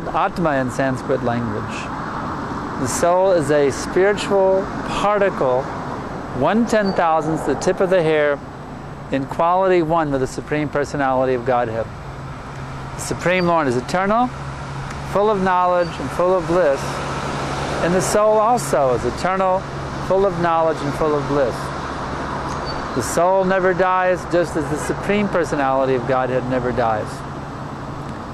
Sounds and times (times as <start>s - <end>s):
Speech: 0.0s - 1.9s, 2.8s - 5.7s, 6.4s - 8.4s, 9.1s - 11.9s, 13.0s - 14.4s, 15.1s - 17.0s, 17.8s - 21.7s, 23.0s - 27.2s.